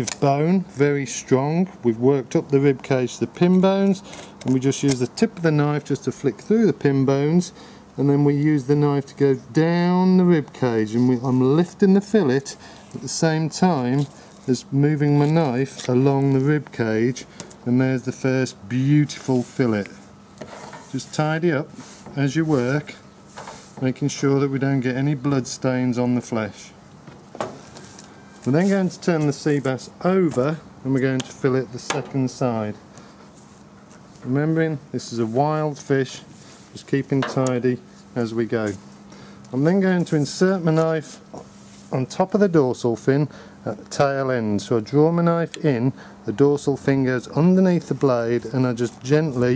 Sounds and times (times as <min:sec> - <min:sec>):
Speech: 0:00.0 - 0:20.1, 0:20.9 - 0:23.0, 0:23.8 - 0:26.8, 0:28.5 - 0:32.8, 0:34.2 - 0:38.8, 0:39.5 - 0:41.2, 0:41.9 - 0:49.5.